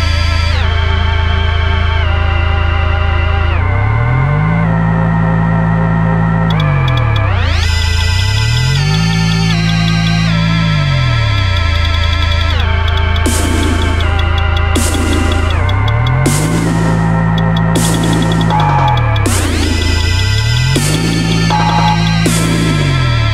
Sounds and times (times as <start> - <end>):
Dubstep: 3.5 - 23.3.